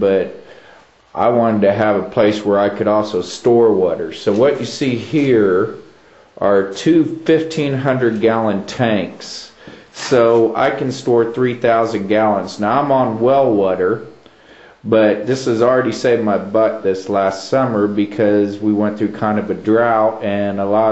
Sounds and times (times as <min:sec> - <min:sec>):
Speech: 0:00.0 - 0:00.4, 0:01.1 - 0:14.2, 0:14.8 - 0:20.9.